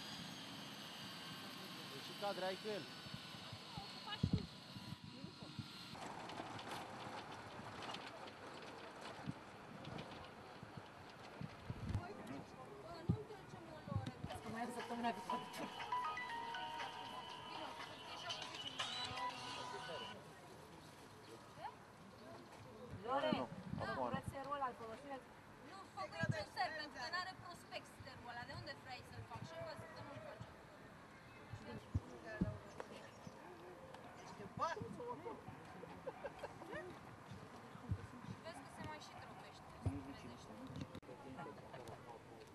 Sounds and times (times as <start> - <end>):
Outside, urban or manmade: 0.0 - 42.5.